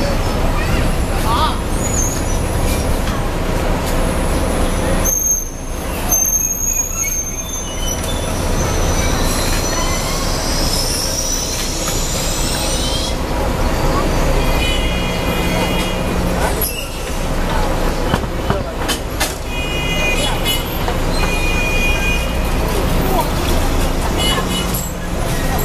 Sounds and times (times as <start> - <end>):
Speech: 0.0 - 1.9, 11.0 - 21.1, 21.8 - 25.6
Traffic noise, roadway noise: 0.0 - 25.6.